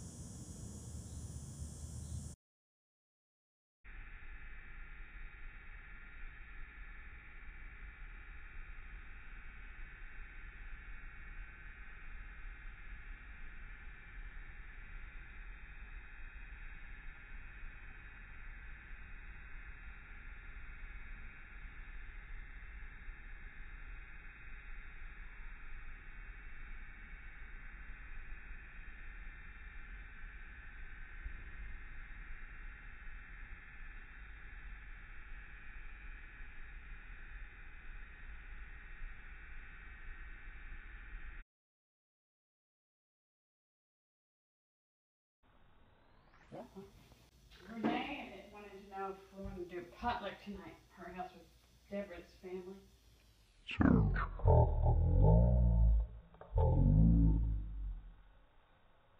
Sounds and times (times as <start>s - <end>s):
Speech: 46.6s - 46.9s, 47.6s - 52.8s, 53.7s - 57.5s.